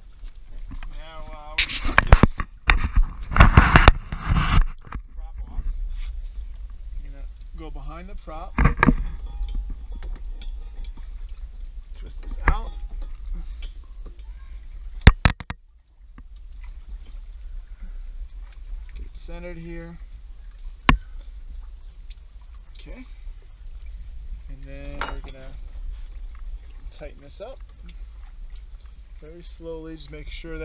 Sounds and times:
Outside, rural or natural: 0:00.0 - 0:30.6.

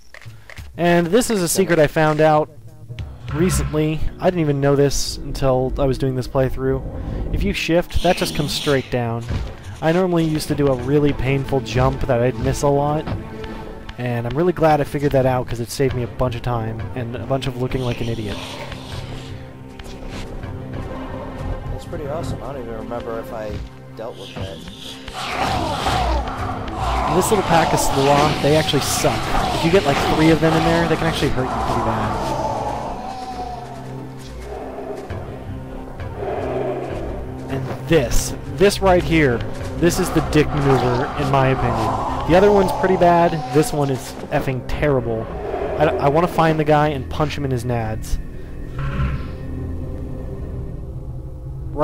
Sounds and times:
Music: 0:00.0 - 0:51.8
Speech: 0:00.8 - 0:13.1, 0:14.0 - 0:18.4, 0:21.7 - 0:24.7, 0:27.0 - 0:32.3, 0:37.5 - 0:48.2.

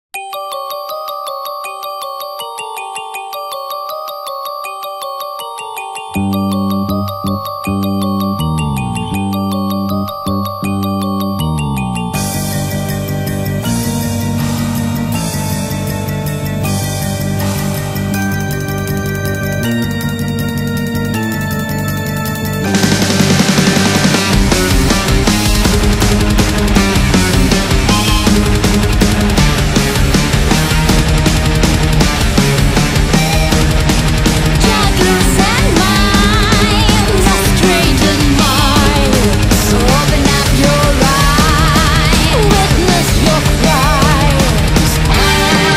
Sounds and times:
Ringtone: 0:00.2 - 0:29.7, 0:30.5 - 0:45.7.

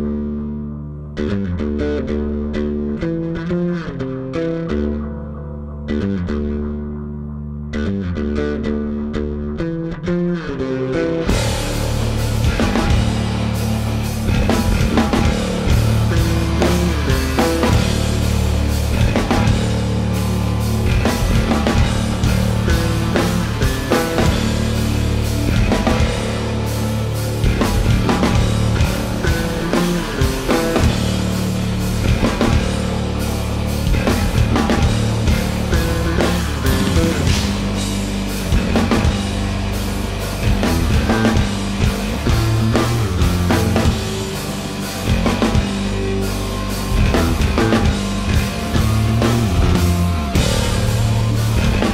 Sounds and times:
Exciting music: 0:11.2 - 0:51.9.

